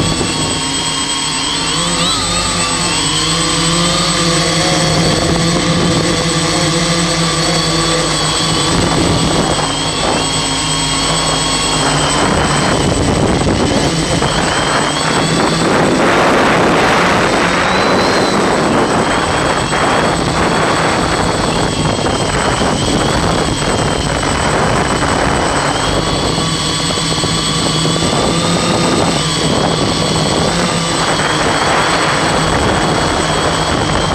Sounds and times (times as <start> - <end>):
Aircraft: 0.0 - 34.1
Heavy engine (low frequency): 0.0 - 34.1
Idling: 0.0 - 34.1.